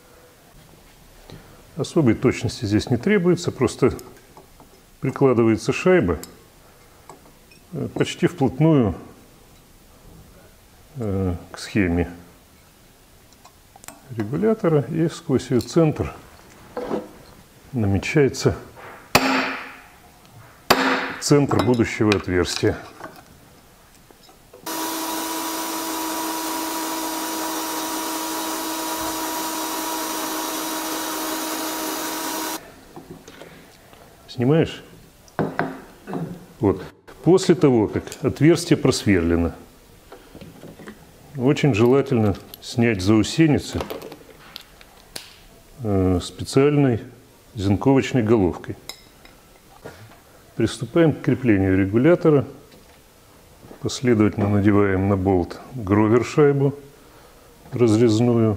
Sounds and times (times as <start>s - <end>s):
Speech: 1.8s - 4.1s, 5.0s - 6.3s, 7.7s - 9.2s, 10.4s - 12.3s, 14.1s - 16.2s, 17.7s - 18.7s, 21.2s - 23.0s, 34.3s - 34.9s, 36.1s - 39.7s, 41.4s - 44.0s, 45.8s - 48.9s, 50.6s - 52.6s, 53.8s - 56.9s, 57.7s - 58.5s.